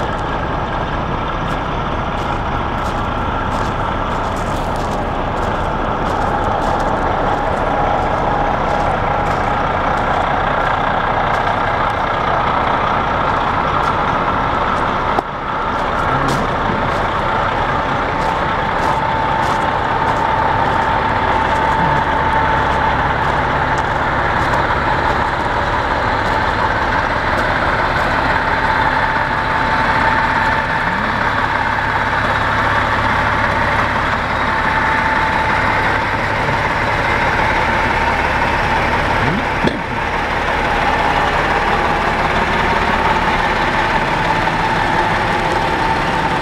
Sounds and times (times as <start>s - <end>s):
Bus: 0.0s - 46.4s.